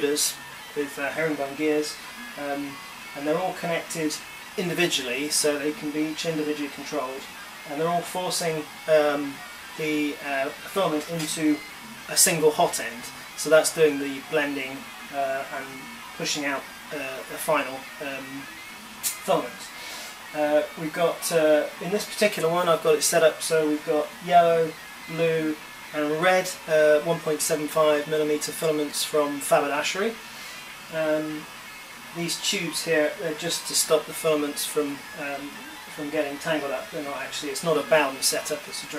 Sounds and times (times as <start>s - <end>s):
Speech: 0.0s - 31.5s, 32.1s - 38.9s
Printer: 0.0s - 38.9s.